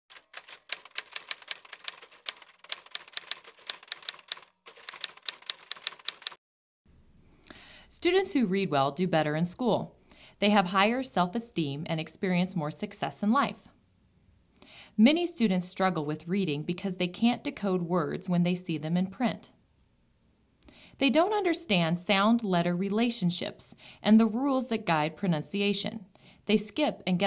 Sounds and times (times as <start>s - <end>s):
Speech: 7.9s - 13.7s, 15.0s - 19.6s, 21.0s - 27.2s.